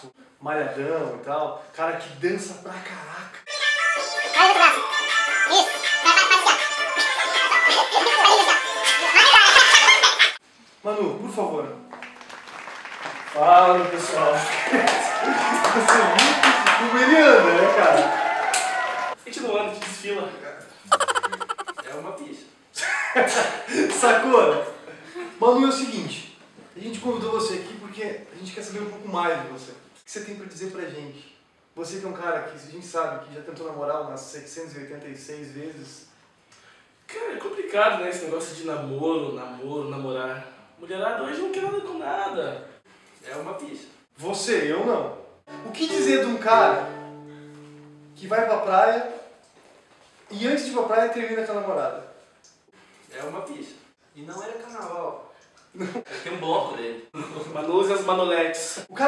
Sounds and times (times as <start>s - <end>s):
Speech: 0.0s - 3.5s, 10.8s - 11.8s, 13.4s - 14.5s, 19.2s - 22.6s, 23.3s - 36.1s, 37.1s - 46.9s, 48.2s - 49.3s, 50.3s - 52.2s, 53.1s - 59.0s
Music: 3.5s - 9.8s, 11.4s - 12.5s, 45.5s - 48.7s.